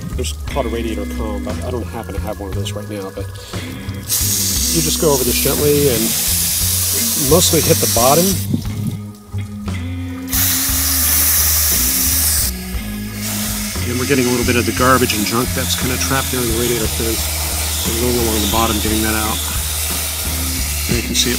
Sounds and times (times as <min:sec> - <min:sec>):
Music: 0:00.0 - 0:21.3
Speech: 0:00.1 - 0:03.5, 0:04.6 - 0:06.2, 0:07.0 - 0:08.4, 0:13.8 - 0:19.5, 0:20.9 - 0:21.3.